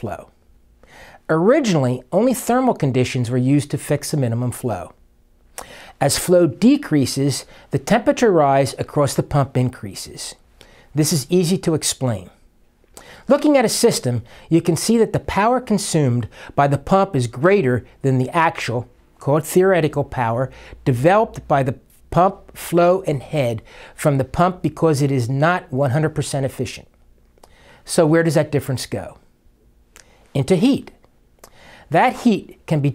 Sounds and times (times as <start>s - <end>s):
Speech: 0.0s - 0.4s, 1.3s - 5.0s, 6.0s - 10.4s, 11.0s - 12.5s, 13.3s - 26.9s, 27.8s - 29.3s, 30.4s - 31.0s, 31.9s - 32.9s.